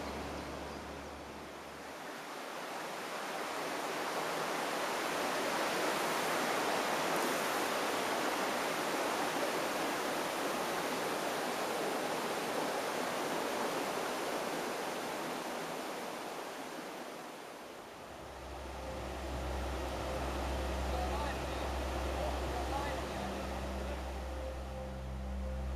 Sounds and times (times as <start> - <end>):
Stream: 0.0 - 25.7.